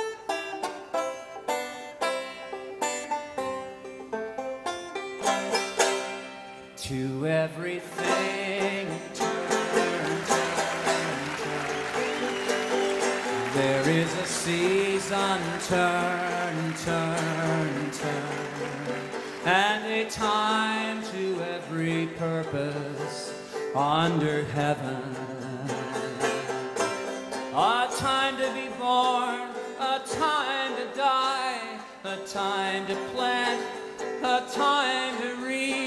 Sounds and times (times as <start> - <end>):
Music: 0.0 - 35.8.